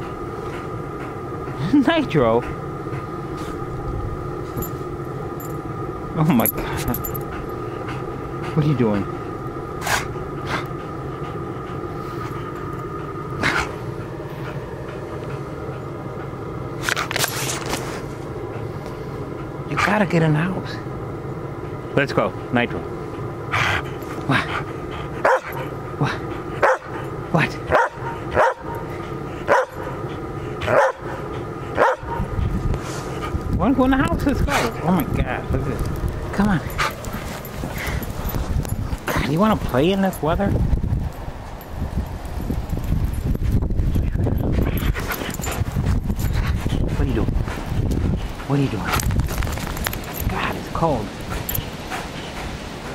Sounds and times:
Speech: 1.6s - 2.5s, 8.6s - 9.1s, 19.7s - 20.8s, 22.0s - 22.9s, 33.6s - 36.7s, 39.2s - 40.6s, 46.9s - 47.3s, 48.5s - 49.0s, 50.2s - 51.1s.

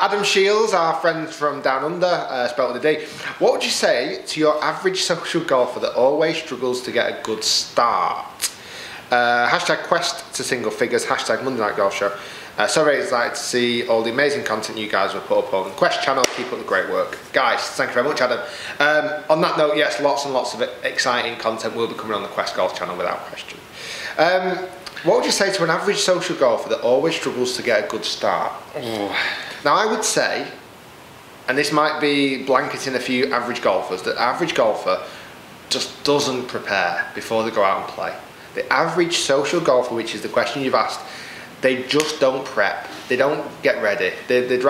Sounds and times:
Boiling: 0.0s - 44.7s.

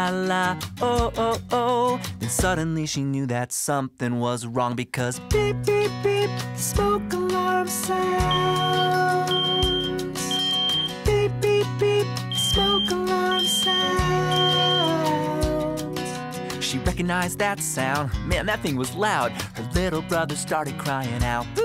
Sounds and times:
Music: 0.0s - 21.6s
Speech: 2.4s - 5.2s, 16.6s - 21.5s.

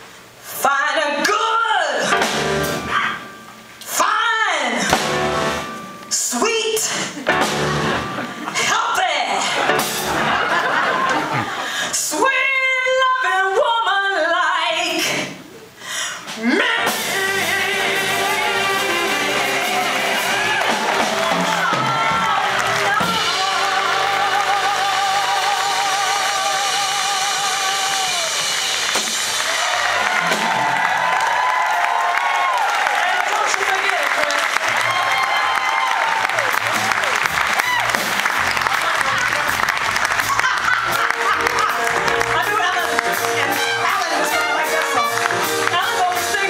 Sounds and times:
Music: 1.9s - 11.5s, 16.2s - 32.2s, 34.4s - 46.5s
Applause: 18.8s - 24.6s, 27.9s - 46.1s.

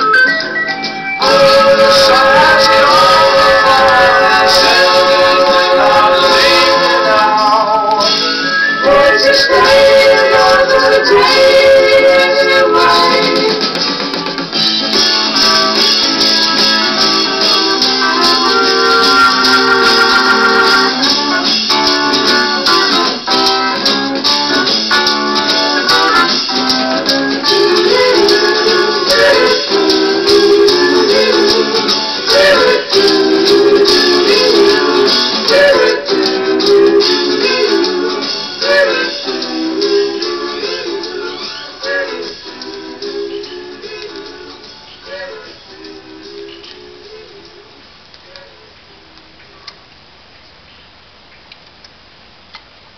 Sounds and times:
Music: 0.0s - 47.9s.

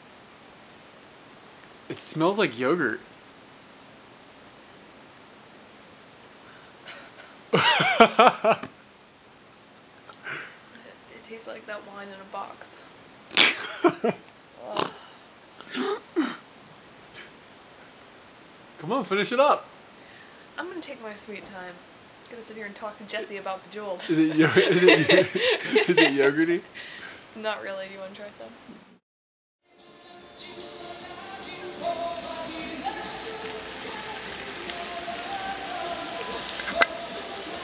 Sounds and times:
Speech: 1.9s - 3.0s, 10.8s - 12.8s, 20.6s - 26.6s, 27.4s - 28.6s.

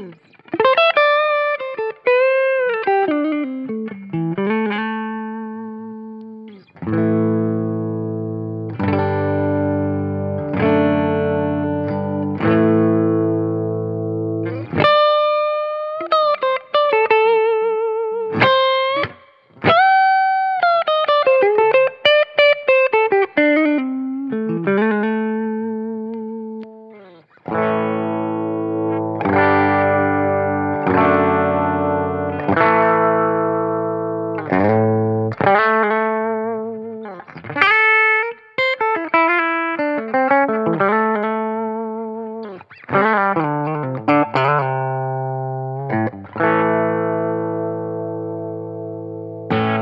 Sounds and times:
Music: 0.0s - 49.8s.

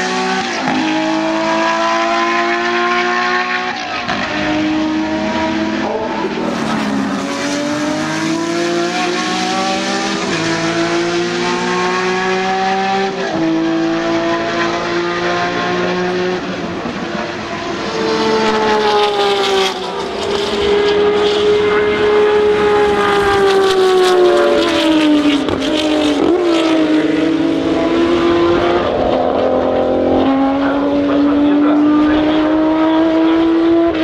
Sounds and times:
Race car, auto racing: 0.0s - 34.0s.

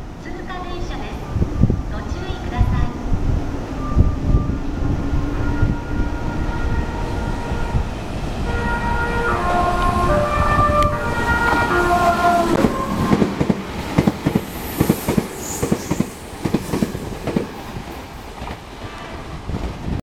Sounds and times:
Outside, urban or manmade: 0.0s - 20.0s
Train: 0.0s - 20.0s.

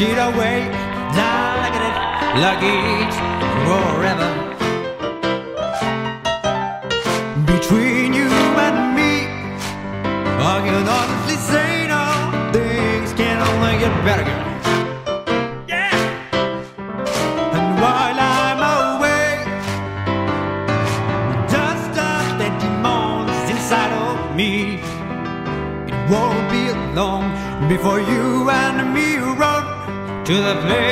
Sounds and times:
Rhythm and blues: 0.0s - 27.1s
Blues: 0.0s - 27.2s.

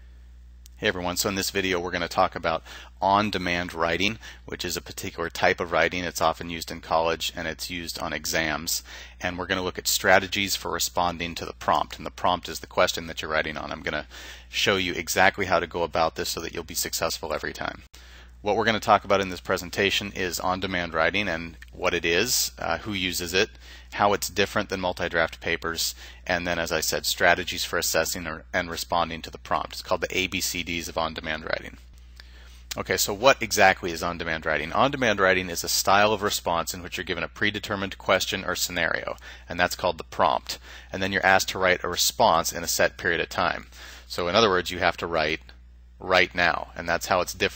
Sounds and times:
Speech: 0.8s - 31.8s, 32.7s - 47.5s.

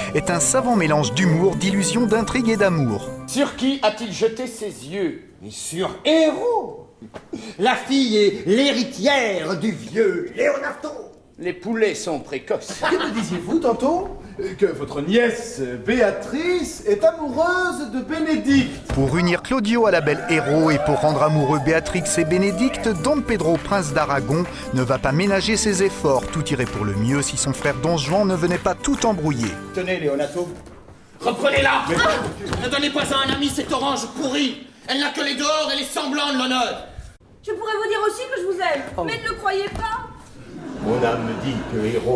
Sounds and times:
Music: 0.0s - 4.0s, 19.9s - 30.8s.

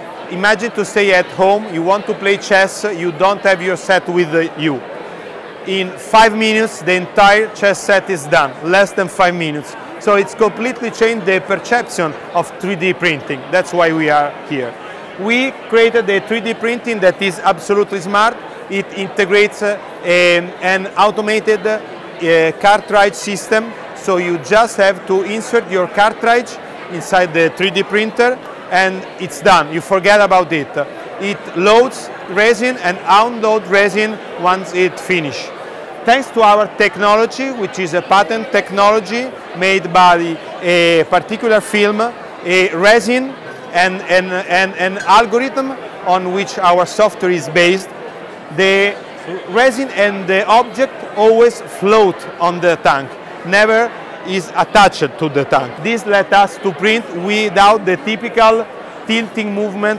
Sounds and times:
Speech: 0.0s - 4.9s, 5.6s - 59.9s.

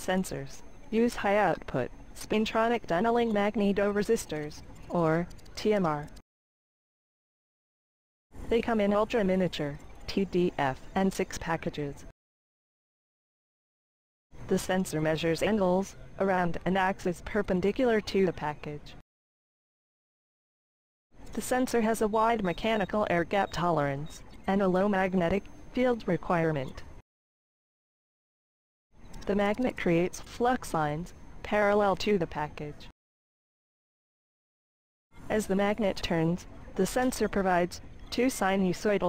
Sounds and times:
Speech: 0.0s - 6.2s, 8.5s - 12.1s, 14.5s - 19.0s, 21.4s - 26.9s, 29.2s - 32.9s, 35.3s - 39.0s.

